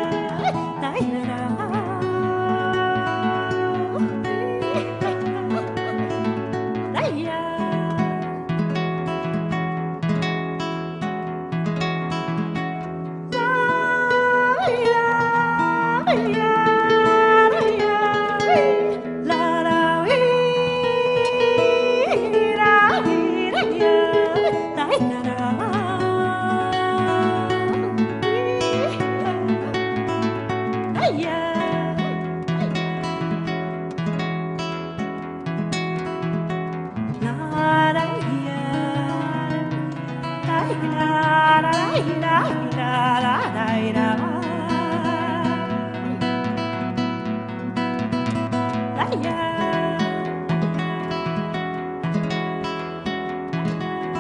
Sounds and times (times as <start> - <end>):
Music: 0.0 - 54.2.